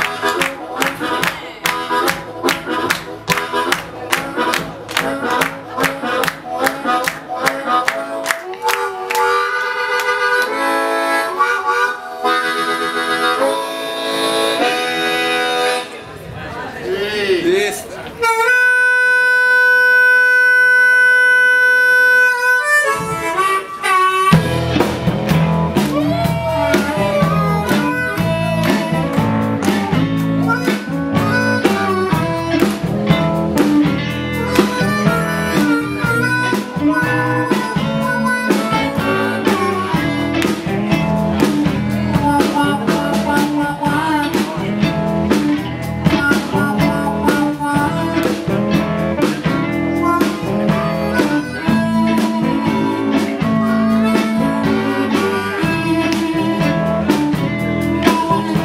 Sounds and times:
Music: 0.0s - 16.0s, 18.2s - 58.6s
Speech: 15.8s - 18.2s.

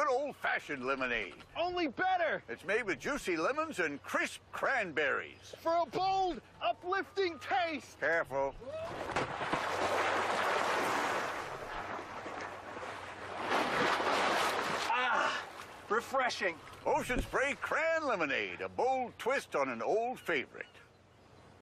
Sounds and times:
Speech: 0.0s - 8.6s, 14.9s - 20.8s
Waves, surf: 0.0s - 20.7s.

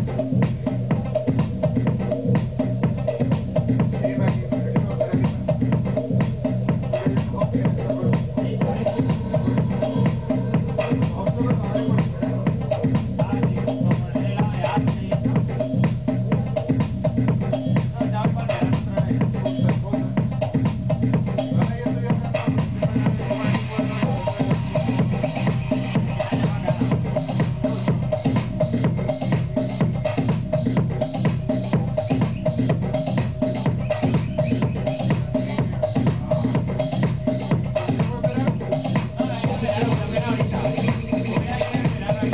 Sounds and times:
Electronica: 0.0s - 42.3s.

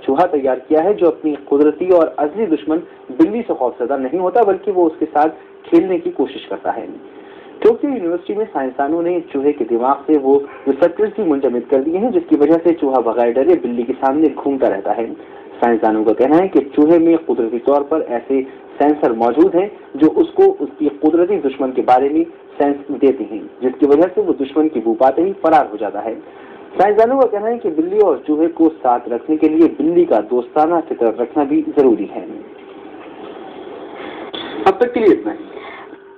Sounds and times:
Speech: 0.0s - 7.0s, 7.6s - 26.2s, 26.8s - 32.5s, 34.7s - 35.6s.

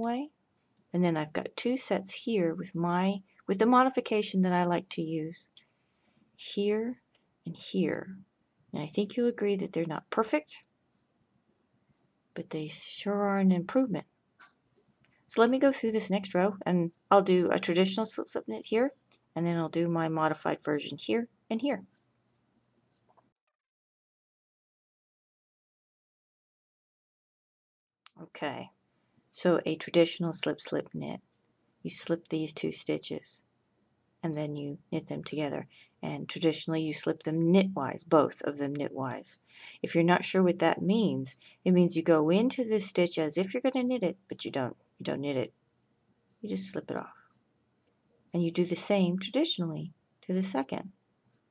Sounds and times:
Speech: 0.0s - 5.6s, 6.4s - 10.7s, 12.4s - 14.1s, 15.3s - 21.9s, 28.1s - 28.8s, 29.4s - 31.2s, 31.8s - 33.5s, 34.2s - 45.5s, 46.4s - 47.2s, 48.3s - 50.9s
Inside, small room: 0.0s - 23.6s, 28.0s - 51.5s.

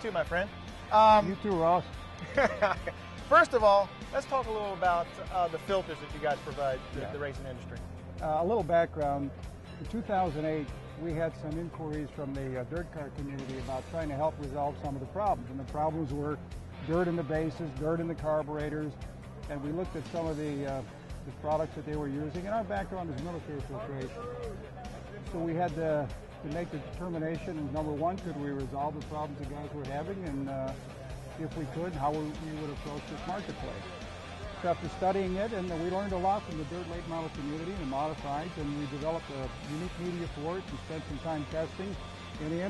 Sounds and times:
Speech: 0.0s - 1.8s, 3.3s - 18.9s, 19.5s - 24.4s, 25.4s - 30.8s, 31.4s - 33.8s, 34.6s - 42.7s
Music: 0.0s - 42.7s.

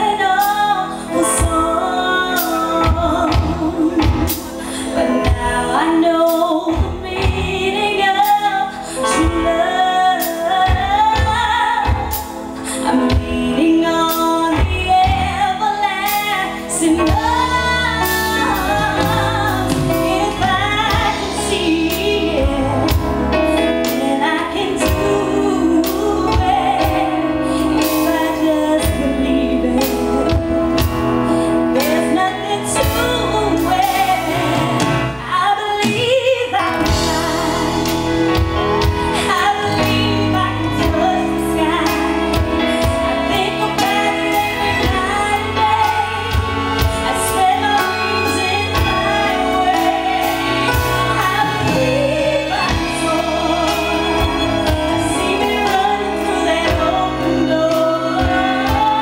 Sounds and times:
Music: 0.0s - 59.0s.

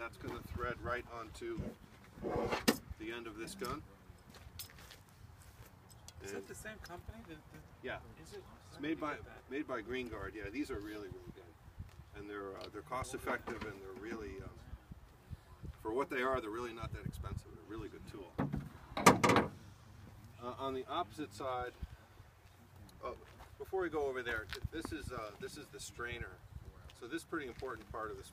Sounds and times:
Speech: 0.0s - 1.7s, 3.0s - 3.9s, 12.2s - 14.8s, 23.0s - 28.3s.

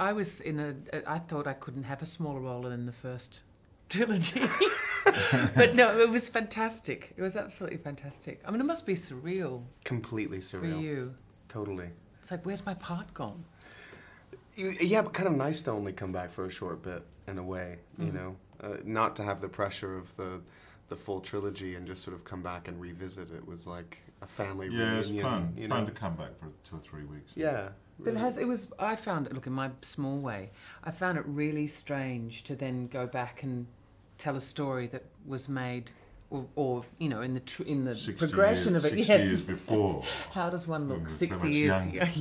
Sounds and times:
Speech: 21.0s - 28.5s, 38.0s - 42.2s.

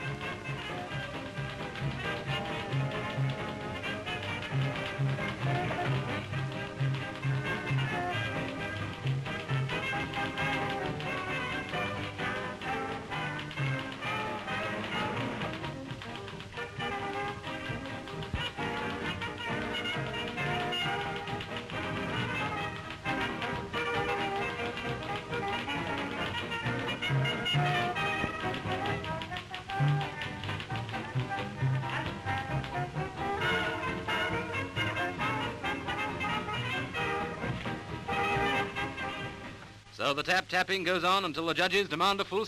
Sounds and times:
Typewriter: 0.0s - 39.4s
Music: 0.0s - 42.4s.

